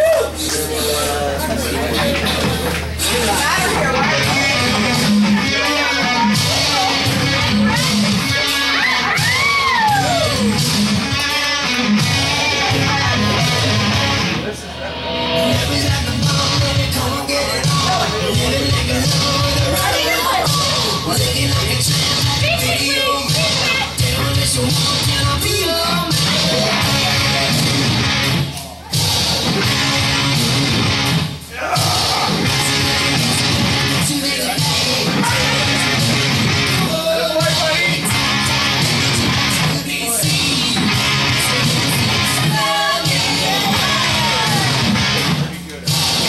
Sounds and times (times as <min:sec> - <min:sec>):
Music: 0:00.0 - 0:46.2
Speech: 0:00.2 - 0:09.2, 0:17.0 - 0:24.1, 0:36.8 - 0:38.2, 0:42.4 - 0:46.2.